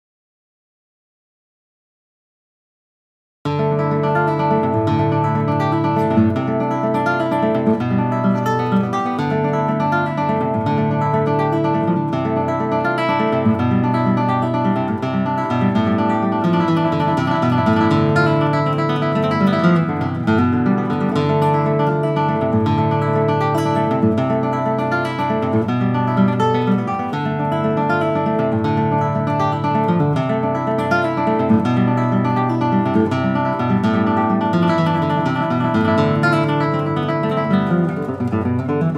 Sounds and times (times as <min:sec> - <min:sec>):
Acoustic guitar: 0:03.5 - 0:38.9.